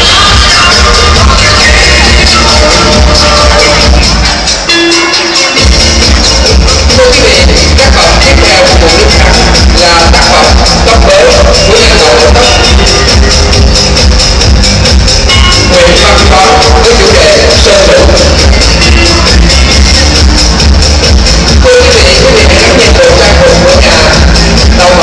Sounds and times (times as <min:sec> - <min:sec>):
Music: 0:00.0 - 0:25.0
Speech: 0:06.9 - 0:12.8, 0:15.7 - 0:18.4, 0:21.6 - 0:25.0.